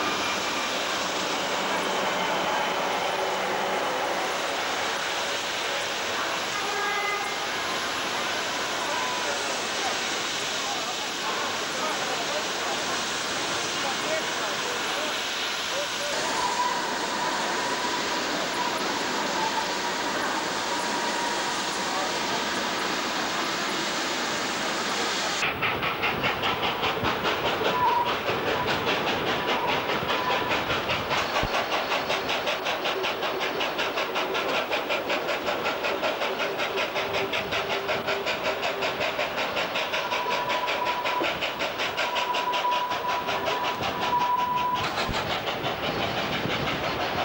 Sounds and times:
Train: 0:00.0 - 0:47.2
Speech: 0:08.4 - 0:16.8, 0:19.1 - 0:23.4.

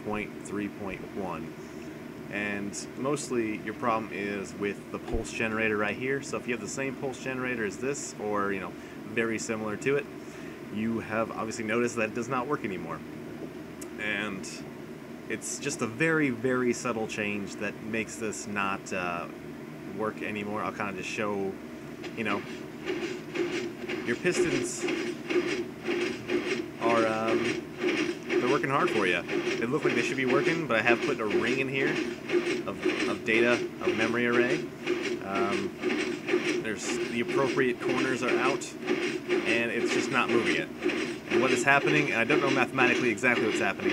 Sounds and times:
Speech: 0:00.0 - 0:01.5, 0:02.3 - 0:10.1, 0:10.7 - 0:13.0, 0:13.9 - 0:14.6, 0:15.3 - 0:19.3, 0:19.9 - 0:21.6, 0:22.2 - 0:22.4, 0:24.1 - 0:24.9, 0:26.8 - 0:27.6, 0:28.4 - 0:32.1, 0:32.7 - 0:34.6, 0:35.2 - 0:35.8, 0:36.6 - 0:38.8, 0:39.4 - 0:40.7, 0:41.3 - 0:43.9.

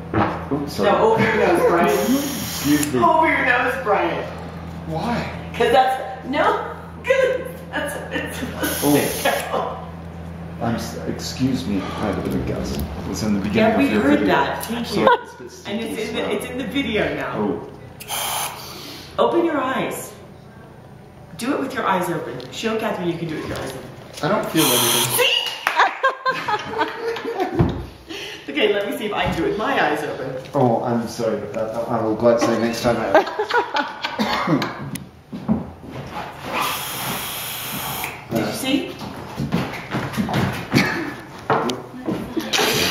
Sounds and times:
Snort: 0:36.5 - 0:38.0.

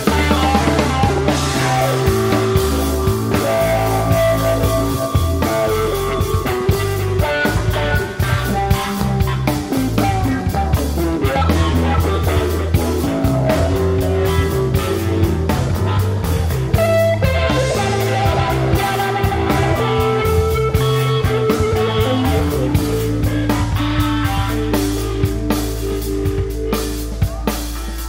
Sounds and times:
Rock and roll: 0:00.0 - 0:28.0.

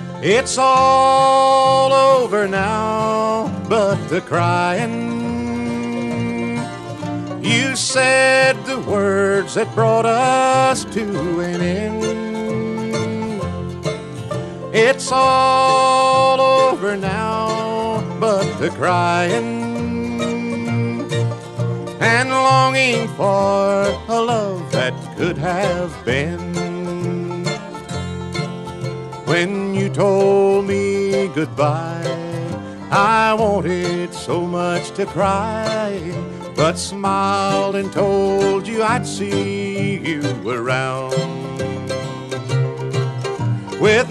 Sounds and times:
Music: 0:00.0 - 0:44.1.

